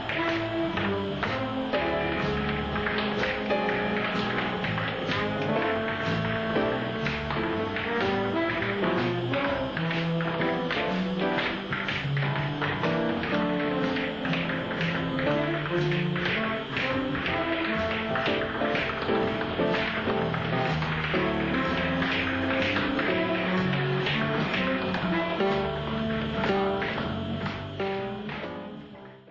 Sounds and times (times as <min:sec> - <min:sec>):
Music: 0:00.0 - 0:29.3.